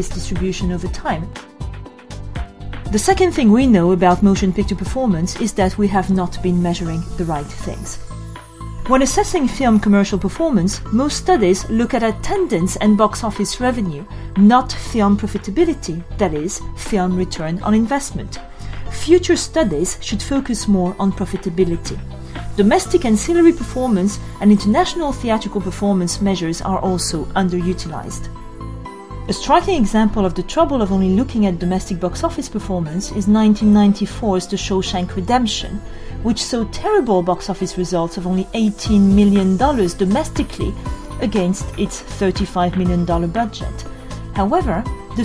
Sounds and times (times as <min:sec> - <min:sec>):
Narration, monologue: 0:00.0 - 0:45.2.